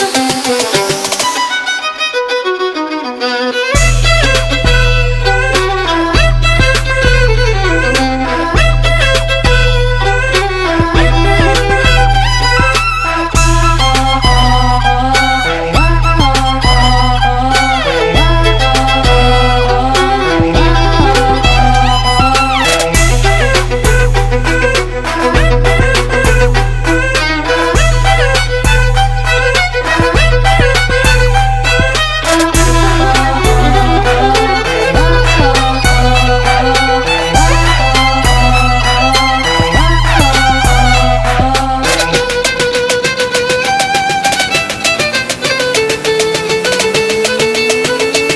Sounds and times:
Violin, fiddle: 0.0s - 48.3s.

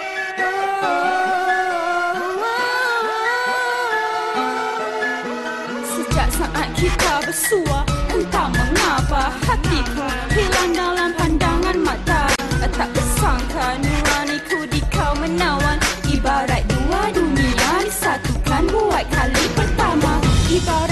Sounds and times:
Music: 0.0s - 20.9s.

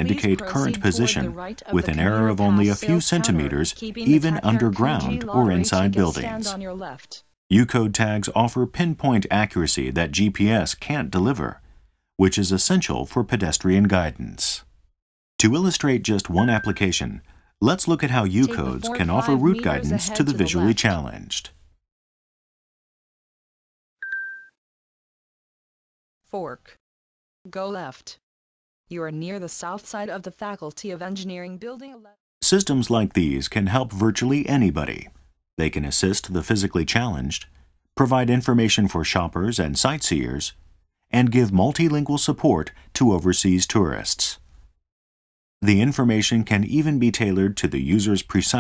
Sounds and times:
Speech: 0.0s - 11.6s, 12.2s - 14.7s, 15.4s - 21.5s, 26.4s - 26.8s, 27.5s - 28.2s, 28.9s - 40.6s, 41.2s - 44.4s, 45.6s - 48.6s.

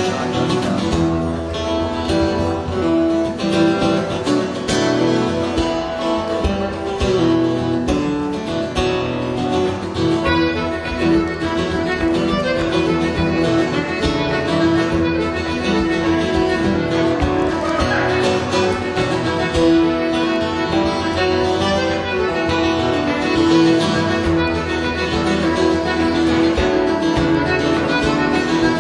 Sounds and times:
Music: 0.0s - 28.8s.

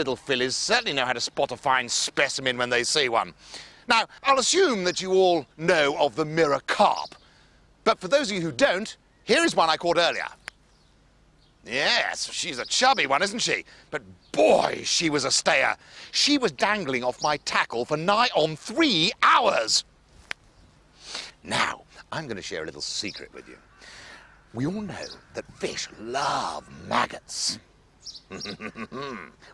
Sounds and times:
Speech: 0.0s - 3.3s, 3.9s - 7.2s, 7.9s - 10.4s, 11.7s - 19.8s, 21.4s - 23.6s, 24.6s - 27.6s.

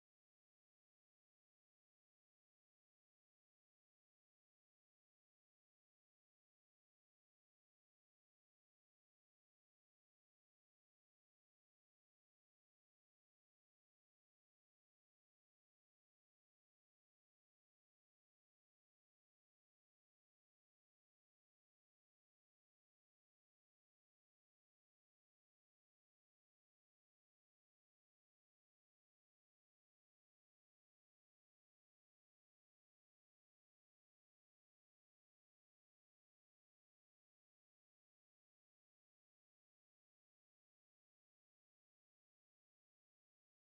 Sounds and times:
Silence: 0.0s - 43.7s.

